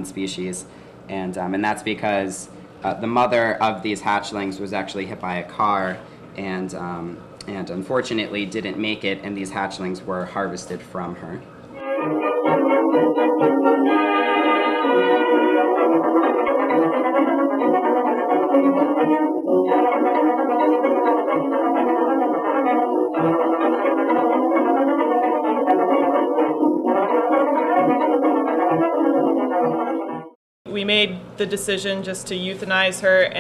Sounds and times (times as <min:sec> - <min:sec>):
Speech: 0:00.0 - 0:11.5, 0:30.7 - 0:33.4
Music: 0:11.8 - 0:30.4.